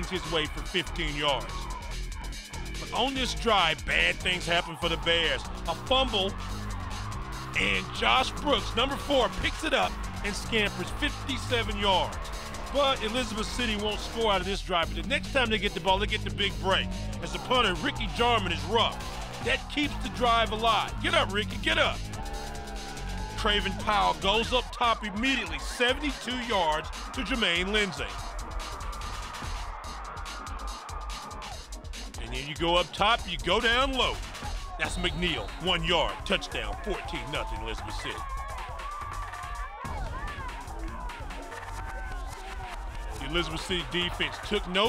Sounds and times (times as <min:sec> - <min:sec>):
Speech: 0:00.0 - 0:01.5, 0:02.8 - 0:06.3, 0:07.6 - 0:12.1, 0:12.7 - 0:22.0, 0:23.4 - 0:28.1, 0:32.2 - 0:34.2, 0:34.8 - 0:38.2, 0:43.2 - 0:44.8
Music: 0:00.0 - 0:44.8.